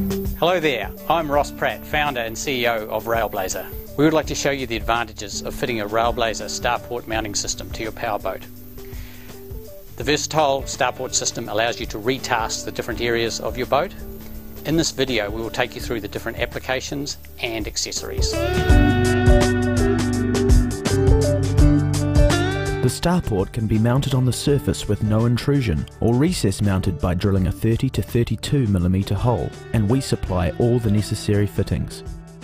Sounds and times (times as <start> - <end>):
Music: 0.0 - 32.4
Speech: 0.4 - 8.5, 10.0 - 14.0, 14.6 - 18.4, 22.8 - 32.1.